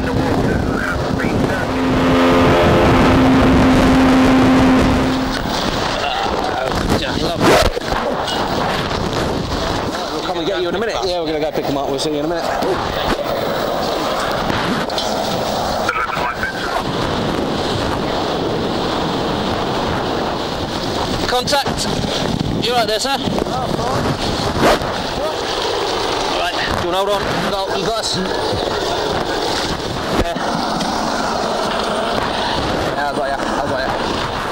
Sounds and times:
Vehicle: 0:00.0 - 0:34.5
Speech: 0:15.9 - 0:16.9, 0:33.0 - 0:34.0.

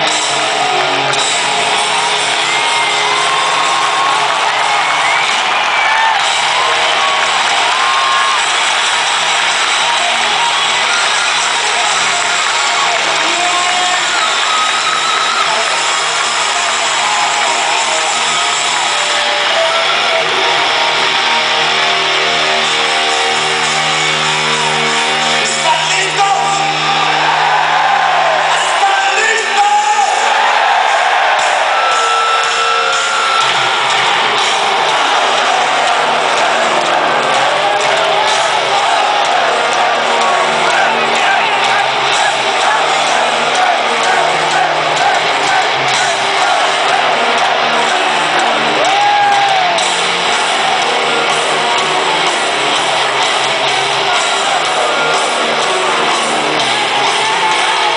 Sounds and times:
Music: 0:00.0 - 0:57.9
Speech: 0:12.9 - 0:14.3, 0:25.5 - 0:27.1, 0:28.5 - 0:30.3.

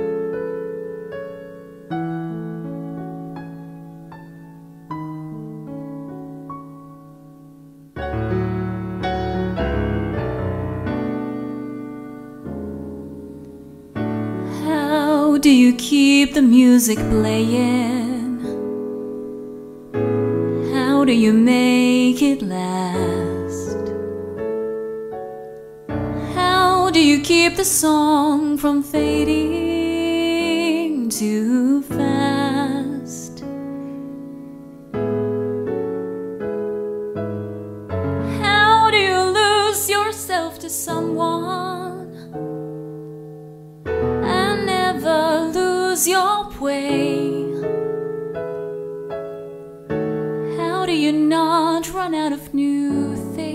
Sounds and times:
Music: 0:00.0 - 0:53.5.

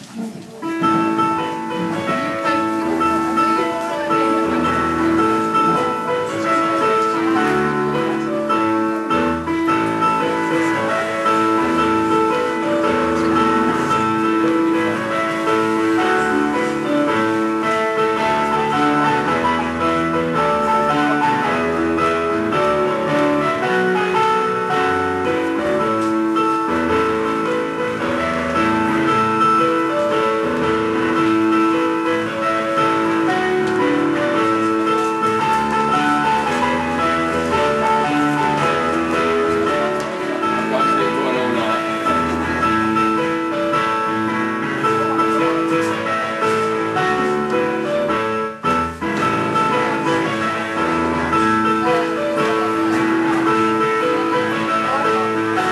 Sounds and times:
Music: 0:00.0 - 0:55.7.

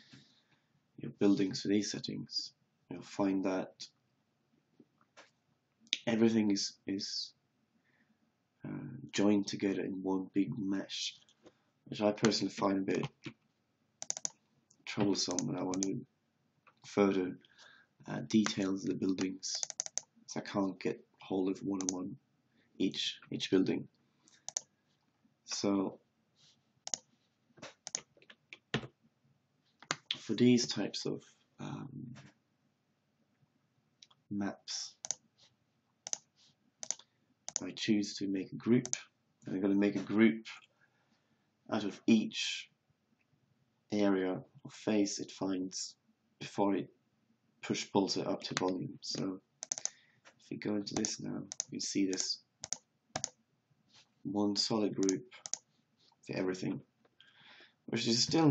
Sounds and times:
Speech: 0:01.0 - 0:04.0, 0:06.0 - 0:07.4, 0:08.6 - 0:11.3, 0:11.9 - 0:13.4, 0:14.9 - 0:16.1, 0:16.9 - 0:17.5, 0:18.1 - 0:19.7, 0:20.3 - 0:22.2, 0:22.8 - 0:23.9, 0:25.5 - 0:26.0, 0:30.1 - 0:32.3, 0:34.3 - 0:35.0, 0:37.6 - 0:40.7, 0:41.7 - 0:42.8, 0:43.9 - 0:47.0, 0:47.6 - 0:49.4, 0:50.4 - 0:52.5, 0:54.3 - 0:55.4, 0:56.3 - 0:56.9, 0:57.9 - 0:58.5.

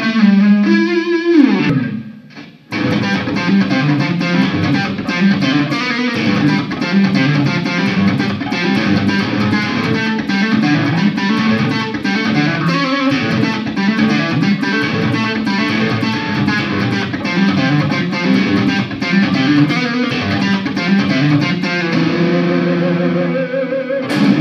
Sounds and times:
Bass guitar: 0:00.0 - 0:24.4
Electric guitar: 0:00.0 - 0:24.4
Strum: 0:24.0 - 0:24.4.

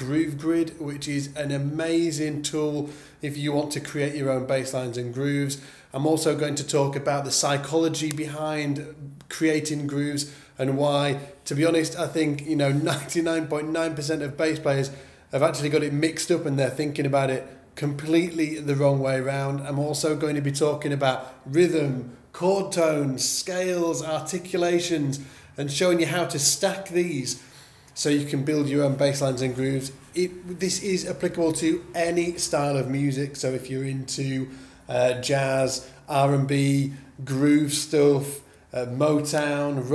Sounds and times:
Speech: 0:00.0 - 0:27.4, 0:28.0 - 0:39.9.

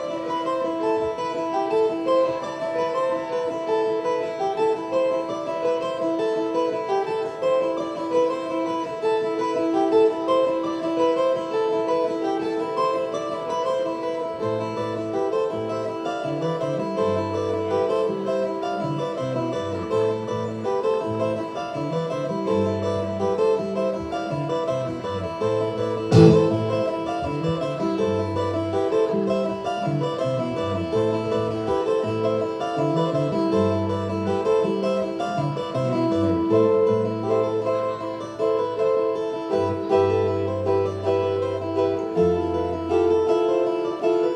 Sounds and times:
Classical music: 0:00.0 - 0:44.3.

